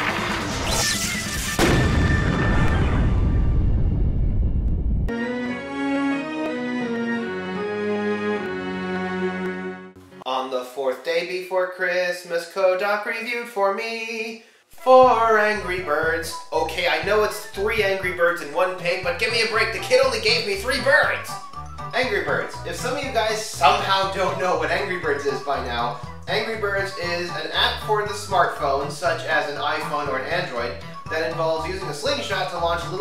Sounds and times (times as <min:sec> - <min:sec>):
Music: 0:00.0 - 0:03.0, 0:05.0 - 0:10.6, 0:14.8 - 0:33.0
Speech: 0:10.3 - 0:33.0.